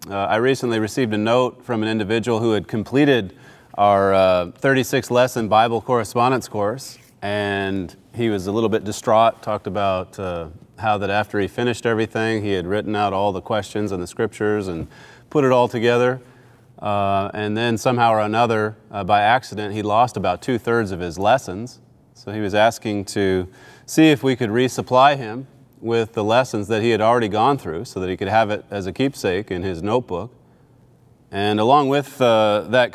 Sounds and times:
Speech: 0.0s - 16.2s, 16.8s - 30.4s, 31.3s - 32.9s.

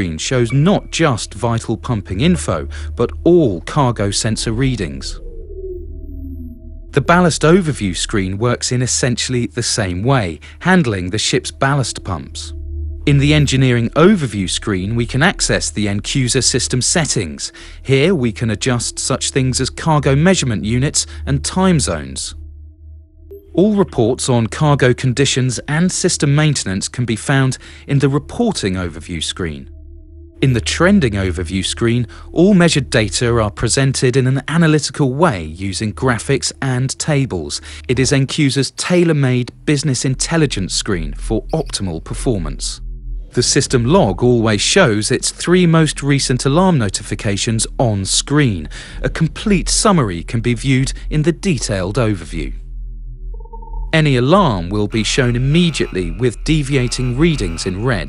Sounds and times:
Speech: 0.0s - 5.2s, 7.0s - 22.4s, 23.4s - 29.7s, 30.4s - 42.8s, 43.4s - 52.6s, 54.0s - 58.0s.

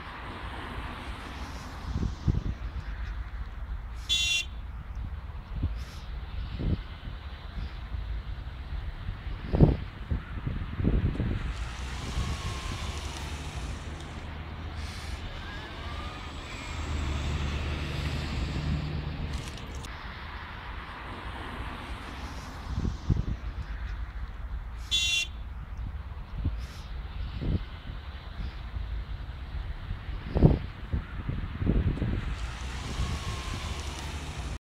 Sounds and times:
Car passing by: 0.0s - 3.4s, 8.4s - 25.0s, 30.0s - 34.6s.

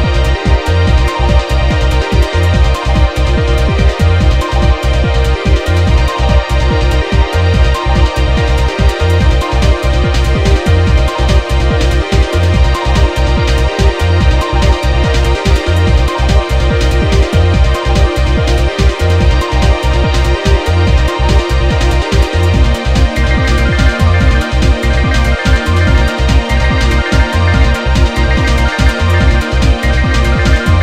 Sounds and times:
Video game music: 0.0s - 30.8s.

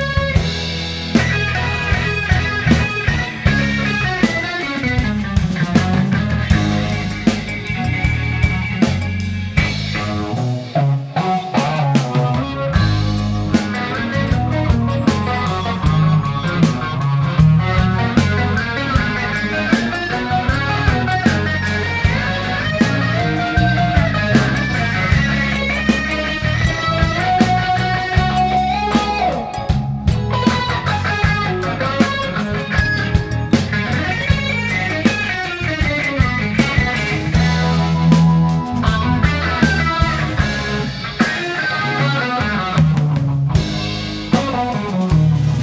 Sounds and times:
Drum kit: 0.0s - 45.6s
Guitar: 0.0s - 45.6s
Psychedelic rock: 0.0s - 45.6s.

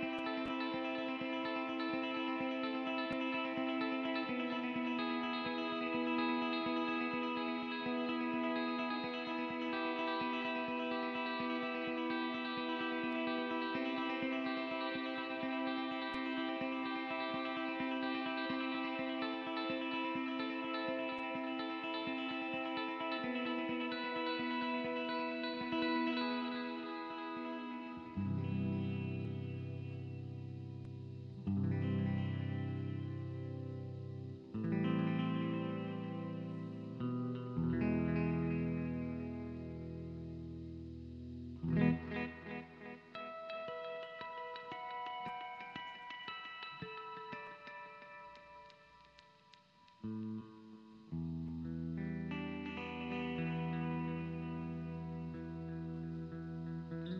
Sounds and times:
Music: 0.0s - 57.2s.

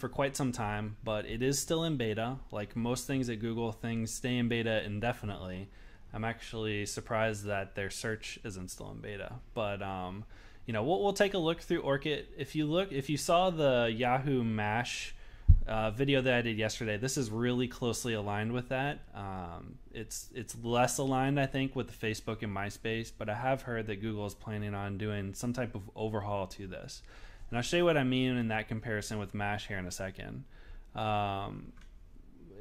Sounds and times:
Speech: 0.0s - 31.8s.

